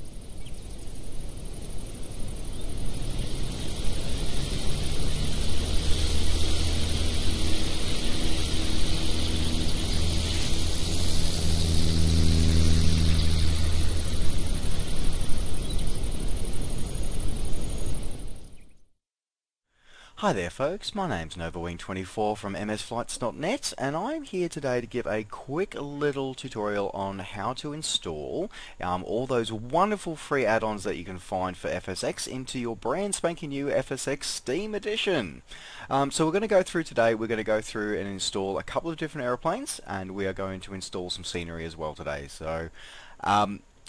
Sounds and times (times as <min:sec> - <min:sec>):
Speech: 0:20.2 - 0:43.8.